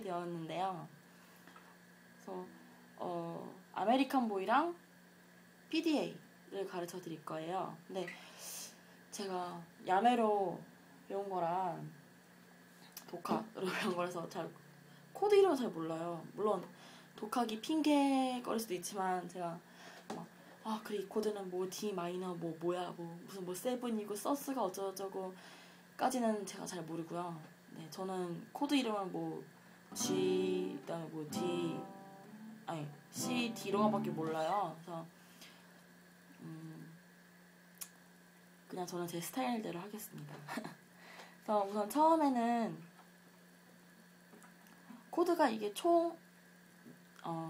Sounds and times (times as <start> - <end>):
Speech: 0.0 - 1.0, 2.2 - 4.8, 5.7 - 12.0, 13.0 - 14.6, 15.2 - 25.4, 26.0 - 31.8, 32.7 - 35.1, 36.4 - 37.0, 38.7 - 40.7, 41.5 - 42.9, 44.9 - 46.2, 47.2 - 47.4.